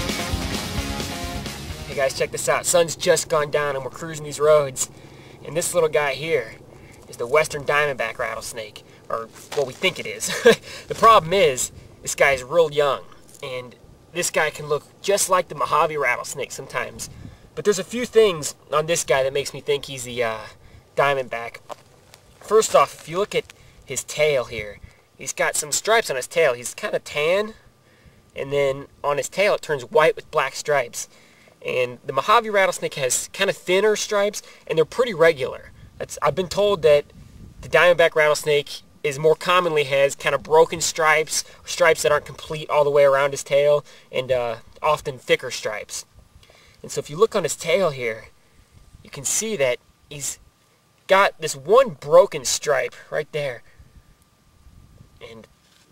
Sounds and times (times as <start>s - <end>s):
Outside, rural or natural: 0.0s - 55.9s
Speech: 1.8s - 21.7s, 22.4s - 27.6s, 28.4s - 46.1s, 46.8s - 48.3s, 49.1s - 50.4s, 51.1s - 53.7s, 55.2s - 55.5s.